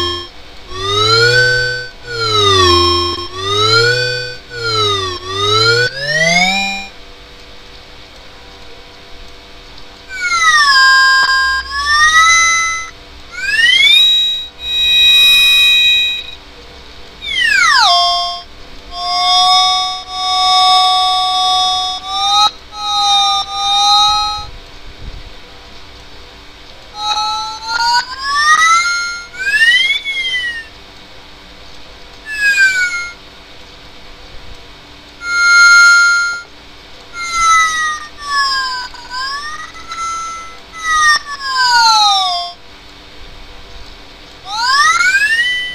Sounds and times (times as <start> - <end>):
Synthesizer: 0.0 - 7.0, 17.2 - 24.5.